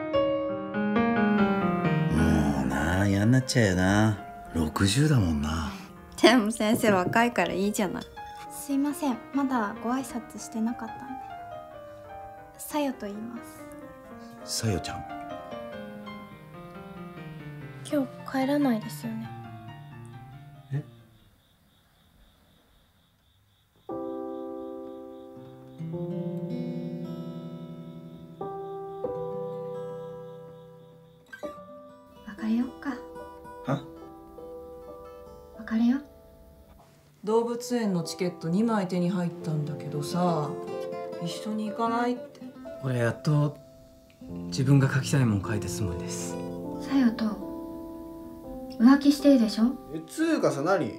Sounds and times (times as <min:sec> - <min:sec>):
Music: 0:00.0 - 0:21.4, 0:23.6 - 0:50.9.